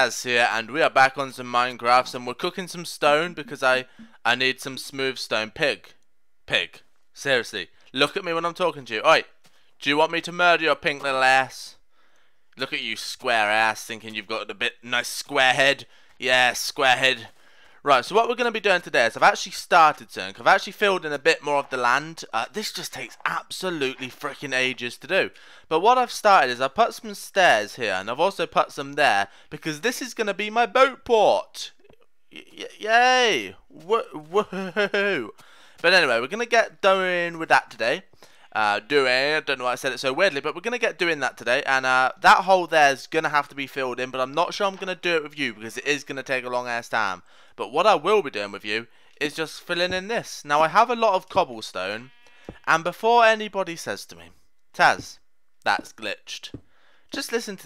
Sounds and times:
Speech: 0.0 - 11.8, 12.6 - 57.6.

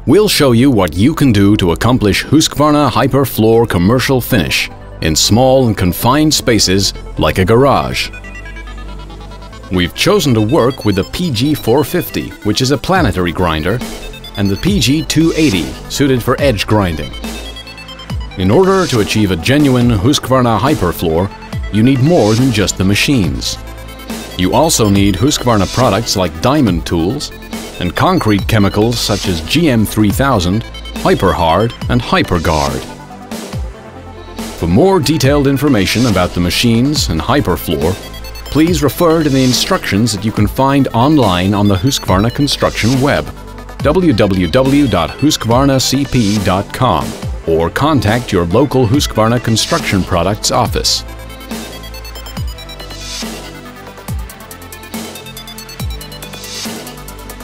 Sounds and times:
Music: 0.0 - 57.4
Speech: 0.1 - 8.1, 9.7 - 13.8, 14.4 - 17.2, 18.4 - 23.6, 24.4 - 32.9, 34.6 - 51.0.

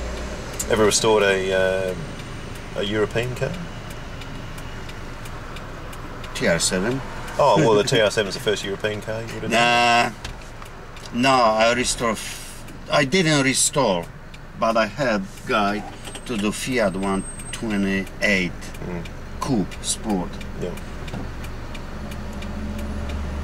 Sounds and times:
Speech: 0.6 - 2.0, 2.8 - 3.7, 6.4 - 10.2, 11.1 - 20.8.

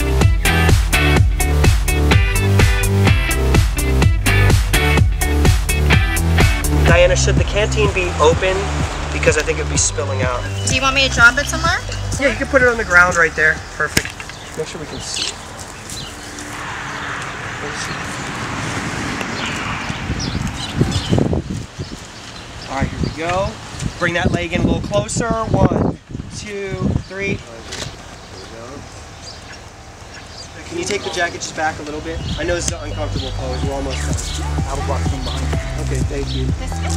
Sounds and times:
Outside, rural or natural: 0.0 - 36.9
Speech: 6.9 - 13.6, 22.7 - 27.7, 30.6 - 36.9.

